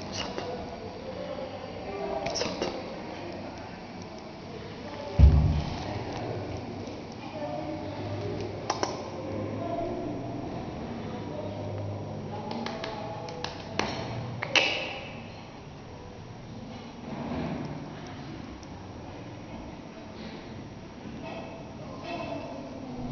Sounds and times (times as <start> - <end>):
Speech: 0.0 - 15.2, 21.2 - 23.1.